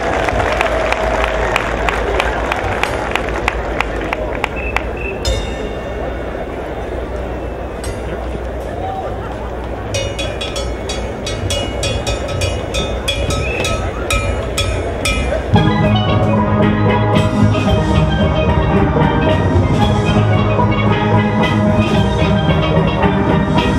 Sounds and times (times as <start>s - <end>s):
Steelpan: 2.7s - 23.7s.